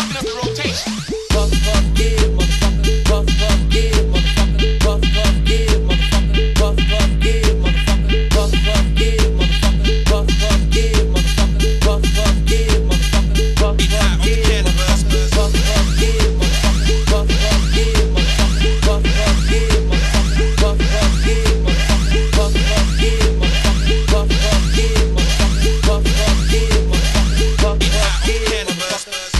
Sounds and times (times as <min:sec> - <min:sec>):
House music: 0:00.0 - 0:29.3.